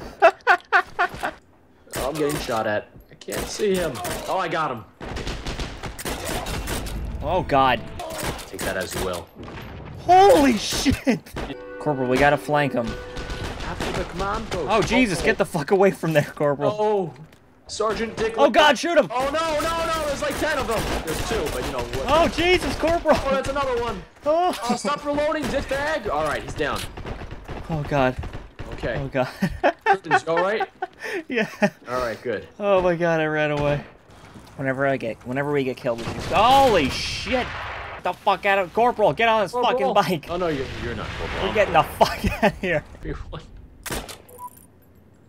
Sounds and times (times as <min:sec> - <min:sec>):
Music: 0:11.5 - 0:13.4.